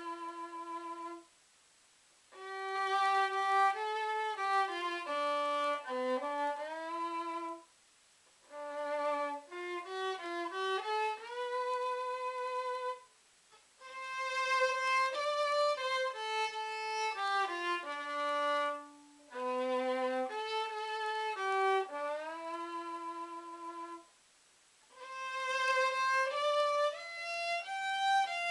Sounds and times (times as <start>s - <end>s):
Violin, fiddle: 0.0s - 1.3s, 2.3s - 7.7s, 8.4s - 13.1s, 13.8s - 24.1s, 24.9s - 28.5s.